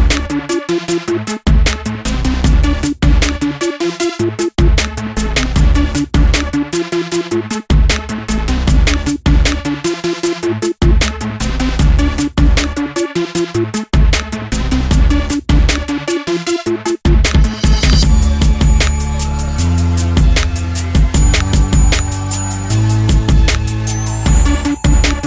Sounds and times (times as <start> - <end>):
Music: 0.0 - 25.2.